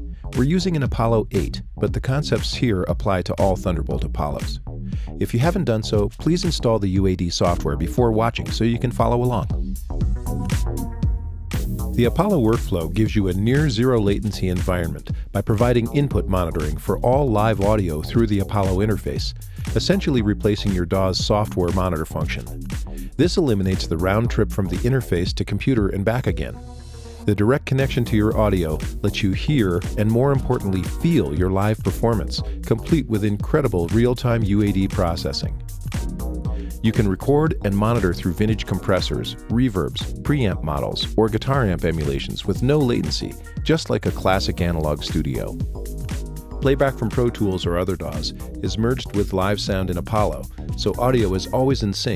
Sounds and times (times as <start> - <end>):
Music: 0.0 - 52.1
Speech: 0.4 - 4.6, 5.2 - 9.6, 12.0 - 22.6, 23.2 - 26.6, 27.3 - 35.6, 36.8 - 45.6, 46.6 - 52.1.